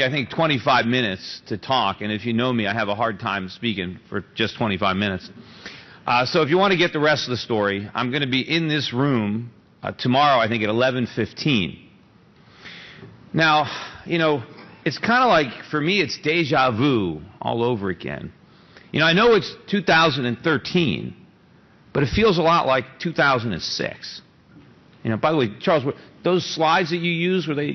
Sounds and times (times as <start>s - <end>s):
Male speech, man speaking: 0.0s - 5.3s, 6.1s - 11.8s, 13.4s - 18.4s, 19.0s - 21.2s, 22.0s - 24.2s, 25.0s - 27.7s
Narration, monologue: 0.0s - 27.7s.